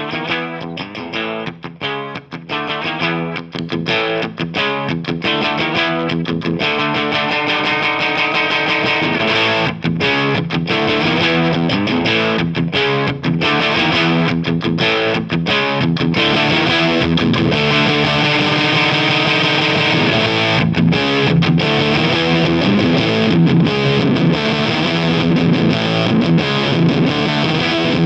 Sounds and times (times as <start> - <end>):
Electric guitar: 0.0 - 28.0
Strum: 0.0 - 28.0.